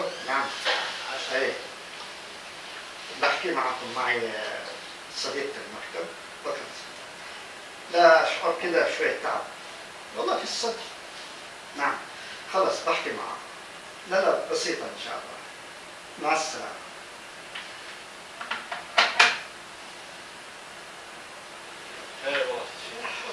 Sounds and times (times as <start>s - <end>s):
Speech: 0.0s - 1.7s, 3.1s - 6.9s, 7.9s - 9.5s, 10.2s - 11.0s, 11.8s - 13.5s, 14.1s - 15.5s, 16.2s - 16.9s, 22.2s - 23.3s.